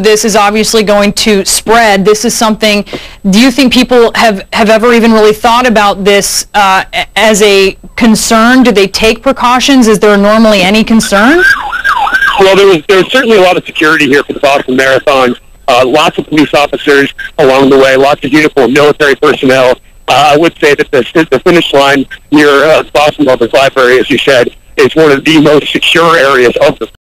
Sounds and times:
Speech: 0.0 - 11.4, 12.4 - 27.0.

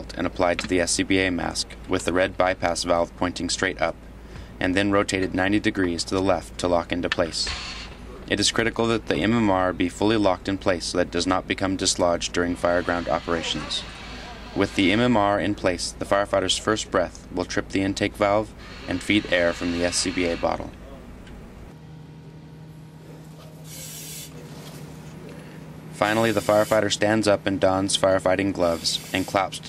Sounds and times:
Speech: 0.0 - 4.0, 4.6 - 7.5, 8.2 - 21.1, 23.0 - 29.6.

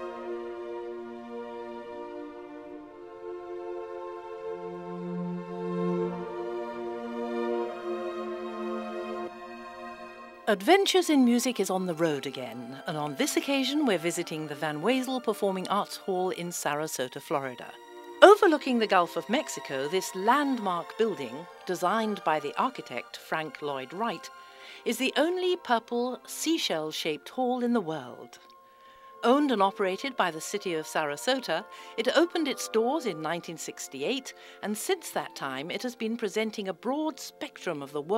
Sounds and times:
Music: 0.0 - 38.1
Speech: 10.5 - 28.4, 29.2 - 38.1.

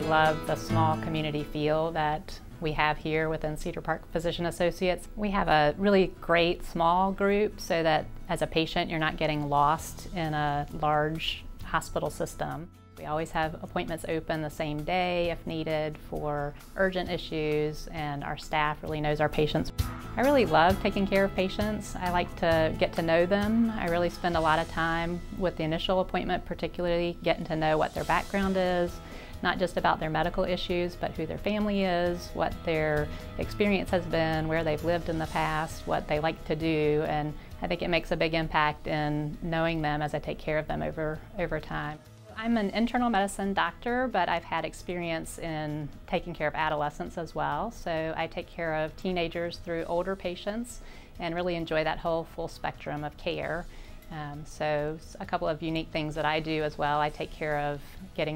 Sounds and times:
Music: 0.0 - 58.3
Speech: 0.0 - 58.3.

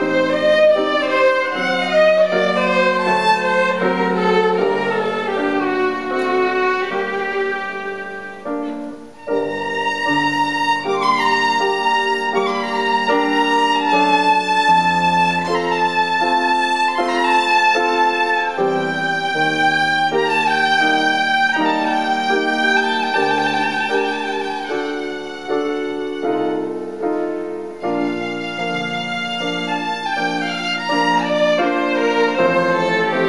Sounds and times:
Violin, fiddle: 0.0 - 33.2.

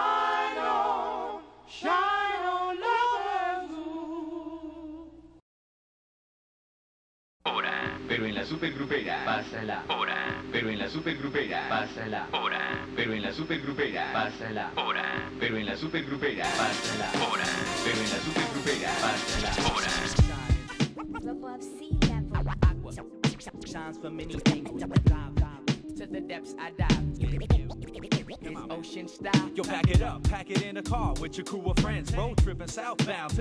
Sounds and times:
Scratching (performance technique): 16.5 - 21.2, 26.9 - 28.7.

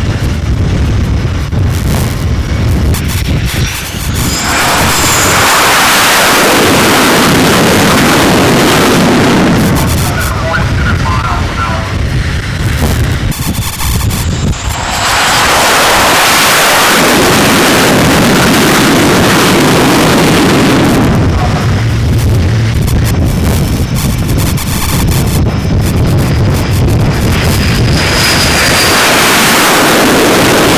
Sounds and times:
Fixed-wing aircraft, airplane: 0.0 - 30.7
Speech: 10.0 - 12.0, 21.3 - 21.7.

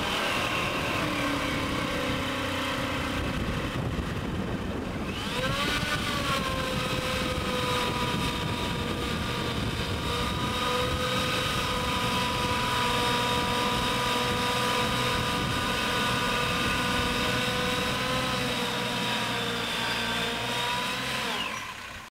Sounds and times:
Truck: 0.0 - 22.1.

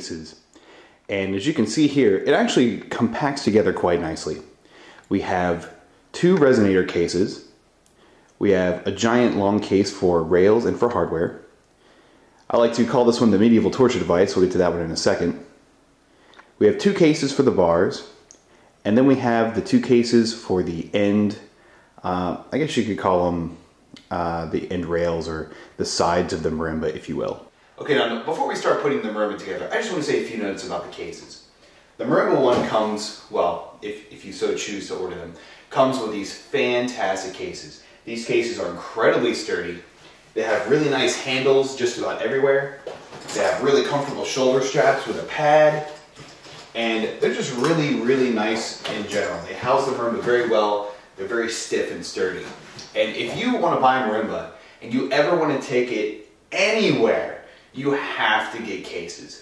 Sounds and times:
Speech: 0.0 - 0.4, 1.1 - 7.6, 8.4 - 11.6, 12.5 - 15.6, 16.6 - 18.2, 18.8 - 46.1, 46.8 - 59.4.

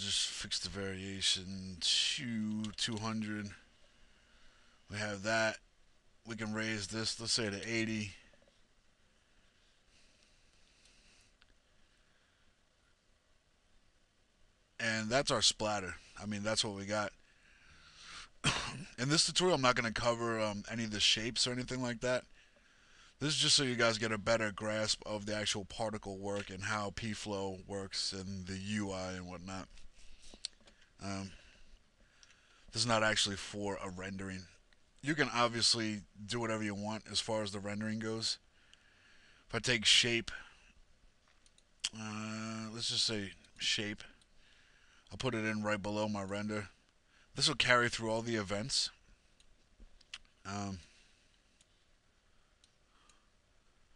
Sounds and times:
Speech: 0.0 - 3.6, 4.9 - 5.6, 6.3 - 8.2, 14.8 - 17.2, 18.8 - 22.3, 23.2 - 29.7, 31.0 - 31.4, 32.7 - 38.4, 39.5 - 40.5, 41.9 - 44.2, 45.1 - 46.8, 47.4 - 49.0, 50.4 - 50.9.

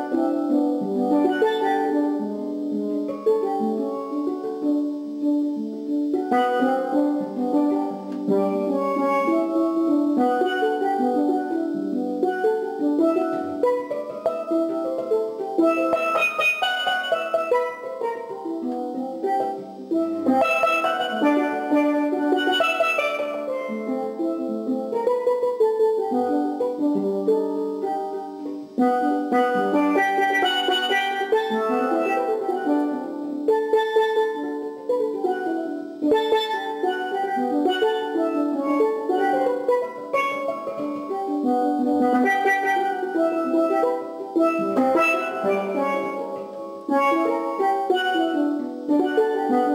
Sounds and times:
Steelpan: 0.0 - 5.2, 6.0 - 49.7.

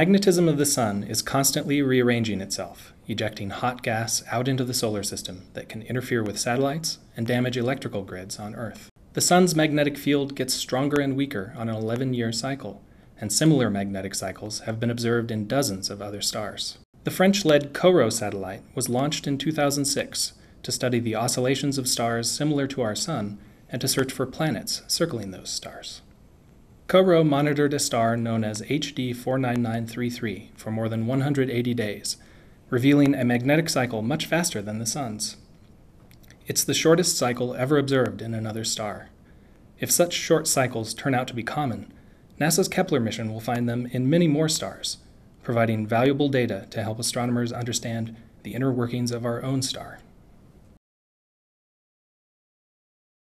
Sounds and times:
Speech: 0.0 - 26.1, 26.9 - 35.5, 36.3 - 39.2, 39.8 - 50.1.

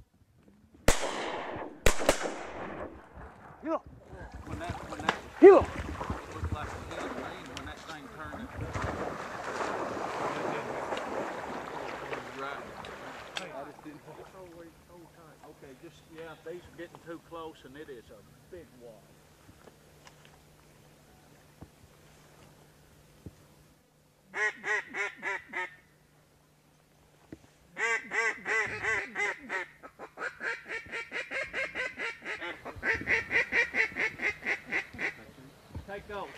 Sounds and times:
Gunshot, gunfire: 0.9 - 2.9.

